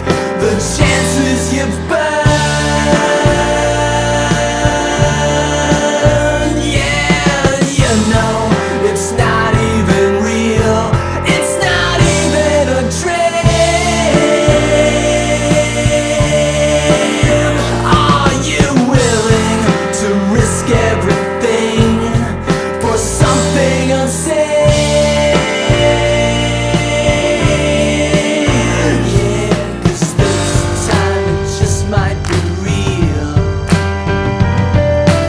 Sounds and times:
Independent music: 0.0 - 35.2.

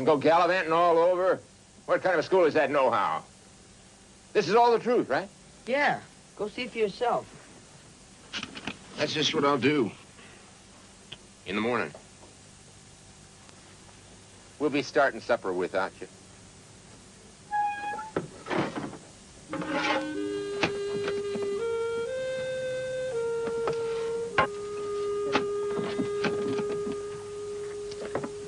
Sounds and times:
Speech: 0.0 - 3.3, 4.4 - 7.3, 9.0 - 10.0, 11.4 - 12.0, 14.6 - 16.2
Music: 17.5 - 18.2, 19.5 - 28.4.

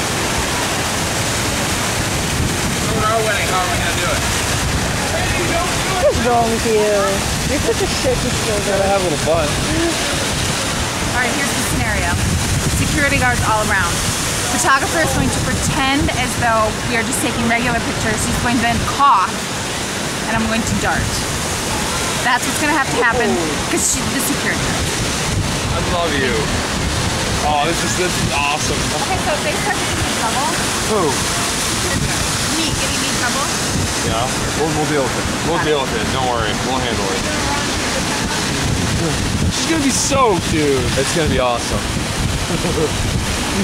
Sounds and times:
Speech: 5.1 - 10.0, 14.6 - 19.3, 22.3 - 24.6, 25.8 - 26.5, 27.4 - 31.2, 31.8 - 41.8, 42.5 - 42.9.

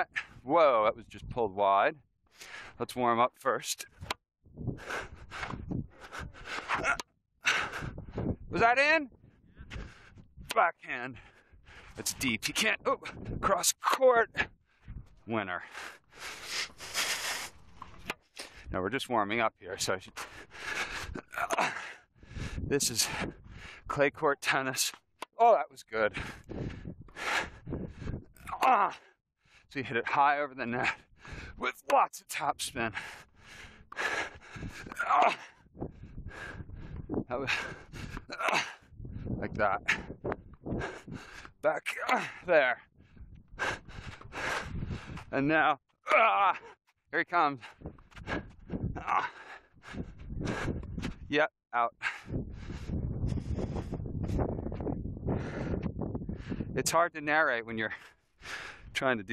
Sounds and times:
Speech: 0.0 - 2.0, 2.8 - 3.9, 8.5 - 9.1, 10.5 - 11.2, 12.0 - 14.4, 15.3 - 15.7, 18.7 - 20.2, 22.7 - 23.2, 23.9 - 26.2, 28.5 - 29.0, 29.7 - 31.0, 31.6 - 33.0, 37.3 - 37.6, 39.4 - 39.9, 41.7 - 42.8, 45.3 - 46.6, 47.2 - 47.6, 51.3 - 52.0, 56.8 - 58.0, 59.0 - 59.3.

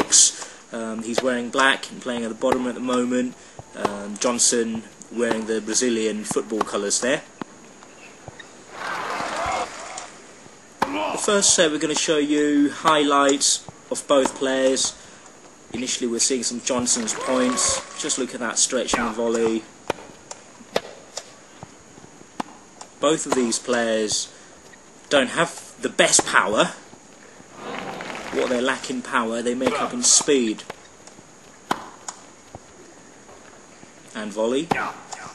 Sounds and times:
Speech: 0.0 - 7.3, 10.8 - 15.0, 15.8 - 19.7, 23.0 - 24.3, 25.1 - 26.8, 28.3 - 30.7, 34.1 - 35.3.

